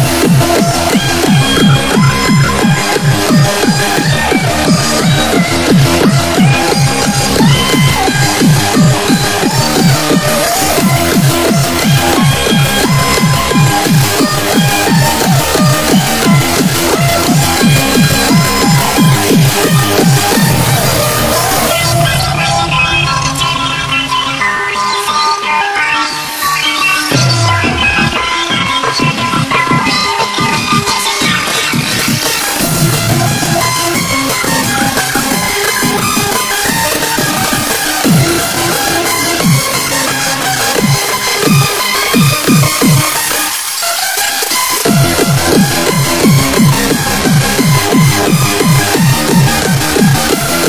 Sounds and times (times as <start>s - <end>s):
Music: 0.0s - 50.6s.